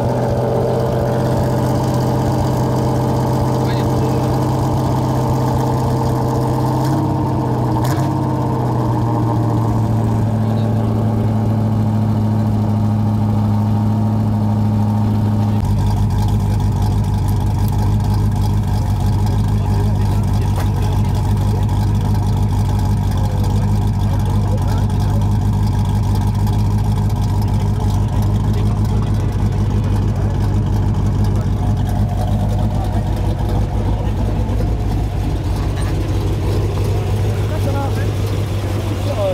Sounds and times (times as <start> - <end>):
Clatter: 0.0 - 11.1, 11.8 - 39.3
Speech: 3.6 - 4.4, 10.4 - 11.0, 19.3 - 22.5, 23.1 - 25.4, 27.4 - 30.4, 31.2 - 31.7, 37.4 - 38.2, 39.0 - 39.3.